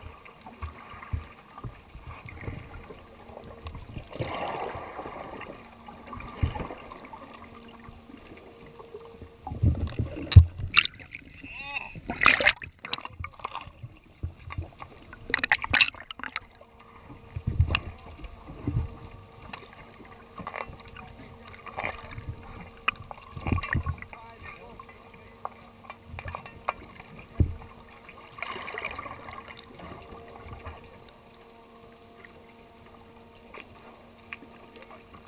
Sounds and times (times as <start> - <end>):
Splash, splatter: 4.1 - 5.6, 12.1 - 13.7, 15.3 - 16.4, 28.3 - 30.0
Speech: 11.4 - 12.0, 24.1 - 25.4.